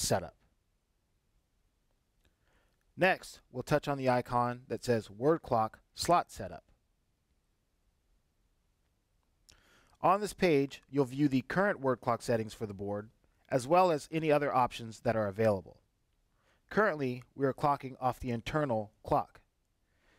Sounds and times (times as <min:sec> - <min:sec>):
Speech: 0:00.0 - 0:00.4, 0:03.0 - 0:06.8, 0:10.0 - 0:15.8, 0:16.7 - 0:19.5.